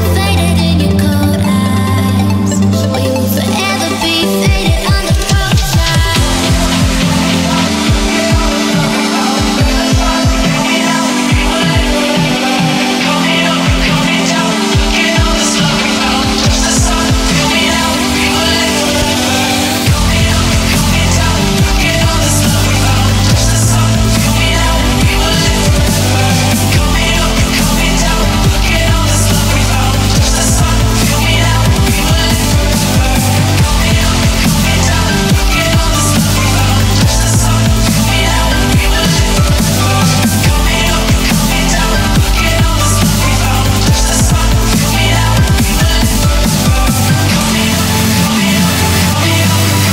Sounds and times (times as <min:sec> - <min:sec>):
Dubstep: 0:00.0 - 0:49.9.